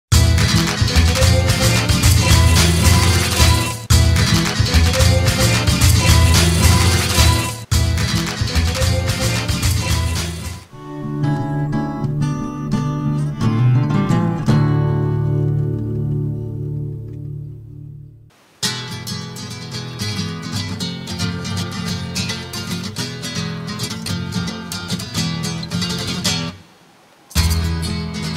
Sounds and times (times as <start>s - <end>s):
Maraca: 0.1s - 10.6s.